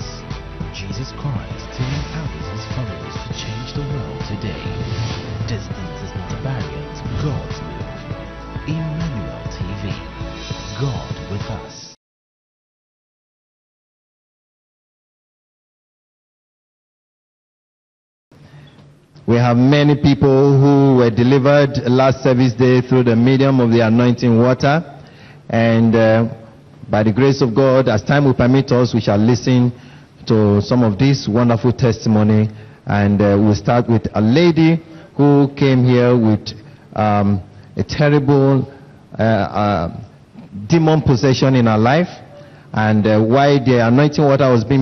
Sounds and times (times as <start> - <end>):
Speech: 0.0 - 4.8, 5.4 - 7.8, 8.7 - 10.1, 10.8 - 12.0, 19.3 - 44.8.